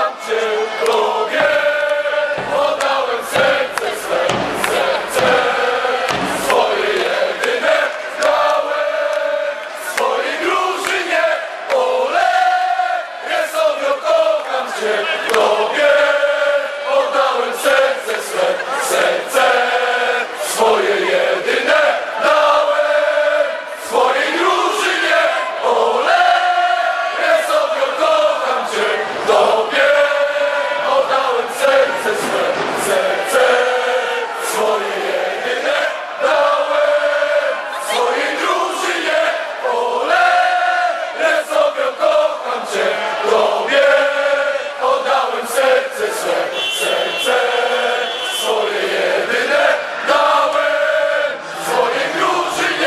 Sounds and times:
Cheering: 0:00.0 - 0:52.8
Crowd: 0:00.0 - 0:52.8.

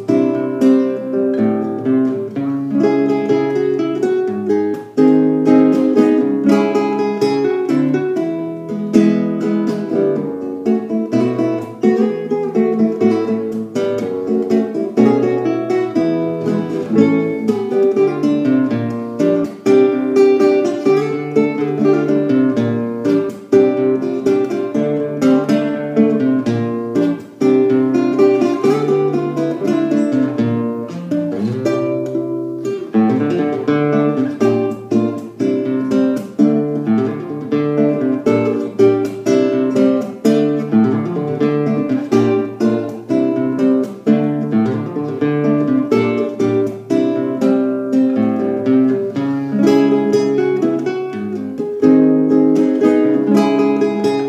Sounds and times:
Acoustic guitar: 0:00.0 - 0:54.2
Strum: 0:00.0 - 0:54.2.

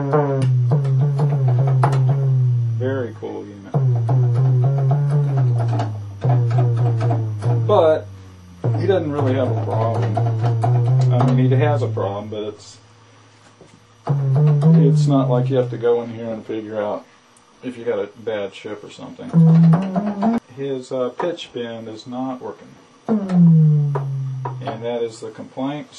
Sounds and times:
Sampler: 0:00.0 - 0:12.8, 0:14.0 - 0:15.8, 0:19.3 - 0:20.4, 0:23.1 - 0:25.0
Speech: 0:02.8 - 0:03.8, 0:07.7 - 0:08.1, 0:08.7 - 0:10.4, 0:11.0 - 0:12.9, 0:14.7 - 0:19.4, 0:20.4 - 0:22.8, 0:24.6 - 0:25.9.

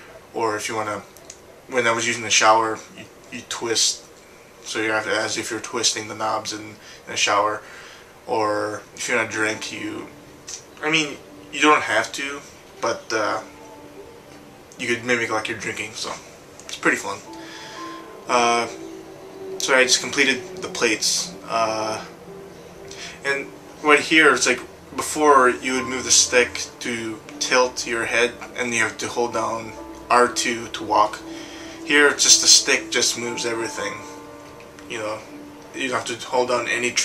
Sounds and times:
Speech: 0:00.3 - 0:01.1, 0:01.7 - 0:04.0, 0:04.7 - 0:07.6, 0:08.3 - 0:13.5, 0:14.8 - 0:17.3, 0:18.3 - 0:18.8, 0:19.6 - 0:22.1, 0:23.0 - 0:34.2, 0:34.9 - 0:37.0.

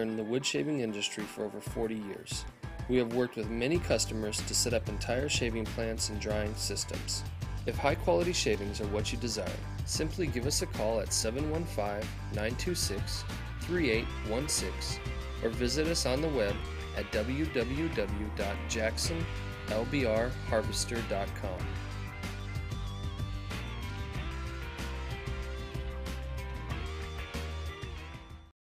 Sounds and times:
Speech: 0:00.0 - 0:21.7
Music: 0:00.0 - 0:28.6.

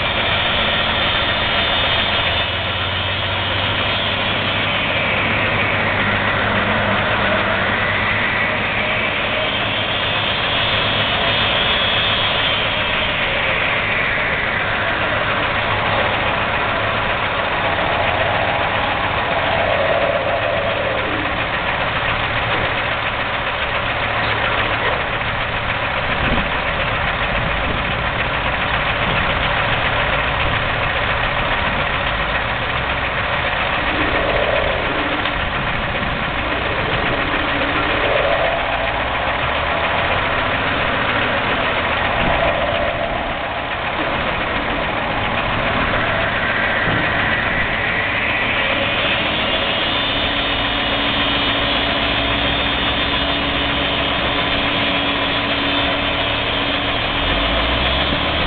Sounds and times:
Truck: 0:00.0 - 0:58.4.

